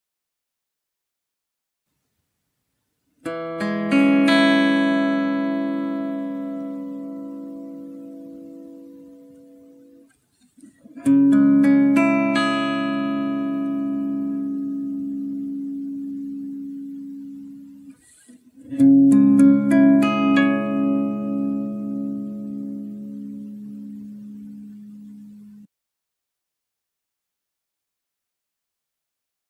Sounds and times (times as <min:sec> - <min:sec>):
Acoustic guitar: 0:03.2 - 0:25.7.